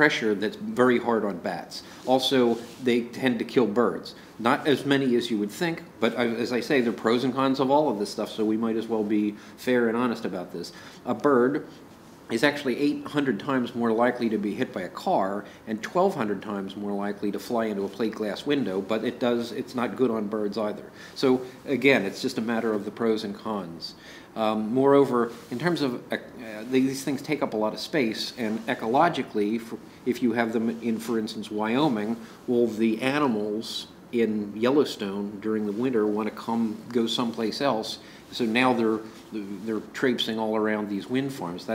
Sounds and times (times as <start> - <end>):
Speech: 0.0 - 11.7, 12.3 - 41.7
Inside, small room: 0.0 - 41.7.